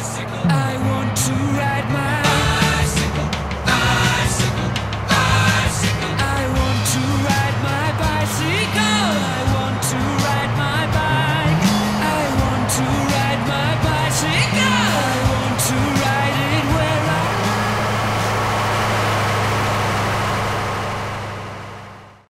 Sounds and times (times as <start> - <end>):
Music: 0.0 - 18.8
Vehicle: 0.0 - 22.3.